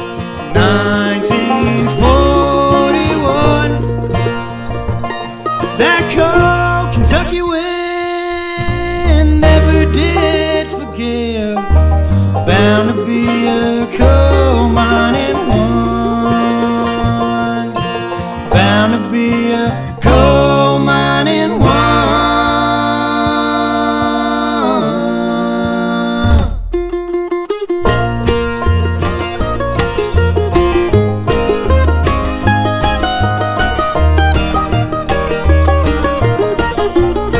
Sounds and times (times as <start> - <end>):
Music: 0.0 - 37.3.